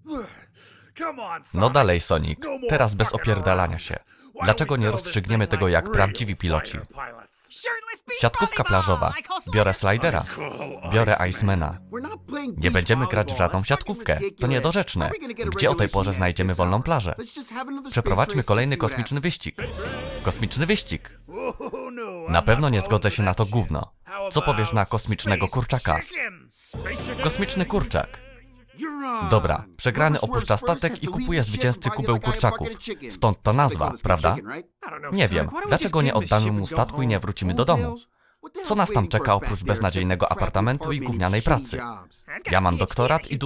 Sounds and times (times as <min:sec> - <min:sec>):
Speech: 0:01.0 - 0:43.4.